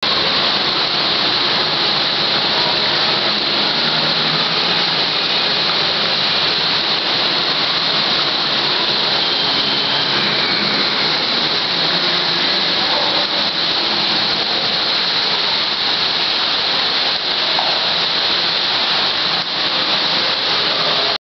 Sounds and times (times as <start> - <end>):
Water: 0.0 - 21.2.